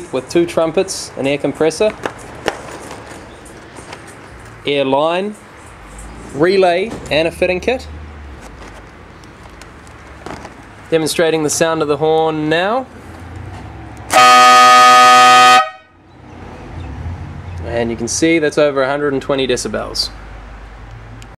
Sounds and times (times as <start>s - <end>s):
Speech: 0.0s - 2.0s, 4.7s - 5.4s, 6.4s - 7.9s, 10.9s - 12.9s, 17.6s - 20.2s
Air horn, truck horn: 14.1s - 16.0s.